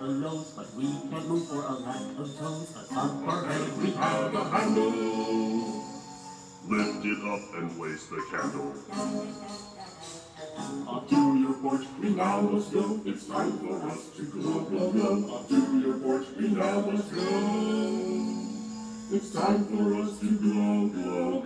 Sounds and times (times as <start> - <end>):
Male singing: 0.0 - 6.0, 6.7 - 9.4, 10.6 - 21.4
Music: 0.0 - 21.4.